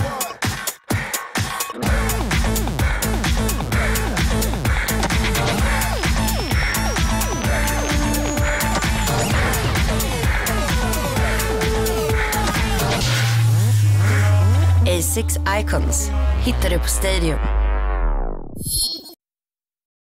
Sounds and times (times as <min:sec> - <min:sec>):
Music: 0:00.0 - 0:18.6
Speech: 0:14.8 - 0:17.5.